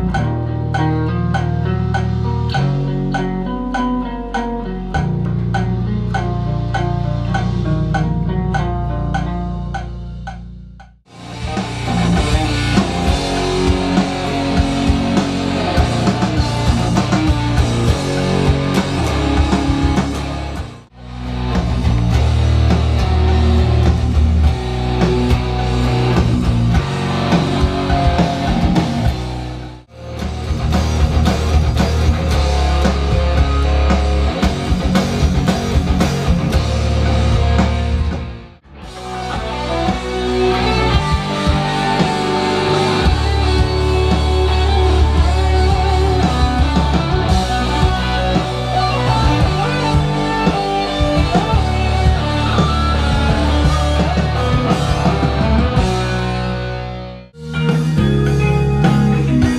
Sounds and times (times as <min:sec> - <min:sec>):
Electric guitar: 0:00.0 - 0:59.5.